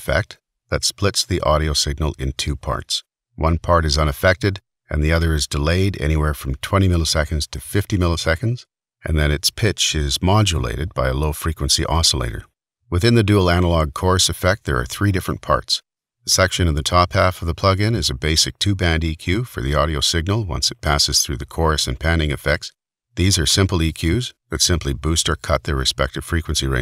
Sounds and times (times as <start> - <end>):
Speech: 0.0 - 26.8.